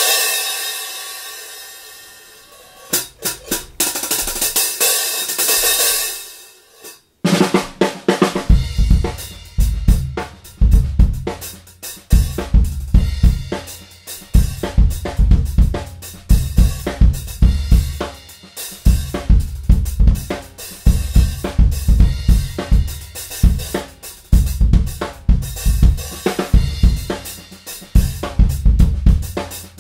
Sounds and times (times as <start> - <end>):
Drum roll: 0.0 - 6.6, 7.2 - 29.8
Drum kit: 0.0 - 29.8
Bass drum: 8.2 - 18.3, 18.9 - 29.8.